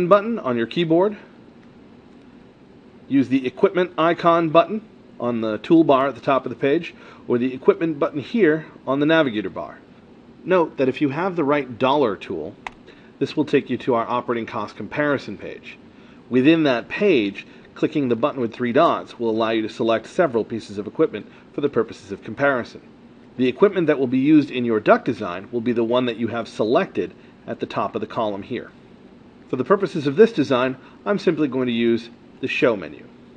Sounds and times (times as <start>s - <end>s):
Speech: 0.0s - 1.3s, 3.1s - 12.6s, 13.2s - 28.8s, 29.5s - 33.2s.